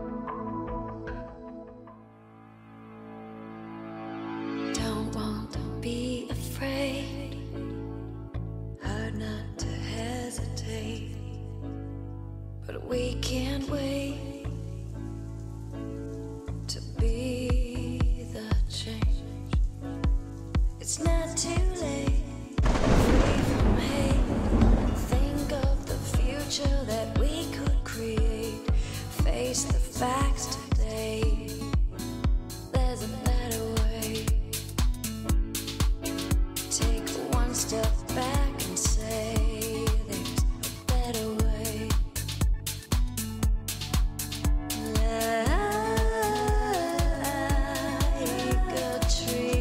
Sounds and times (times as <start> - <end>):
Electronica: 0.0 - 6.1, 13.8 - 49.6.